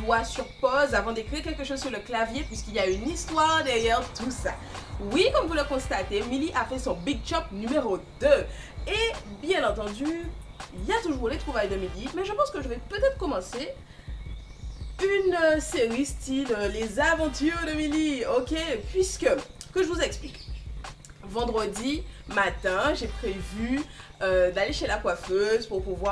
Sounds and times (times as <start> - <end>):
Speech: 0.0 - 13.8, 15.0 - 20.4, 21.2 - 26.1
Music: 0.0 - 26.1.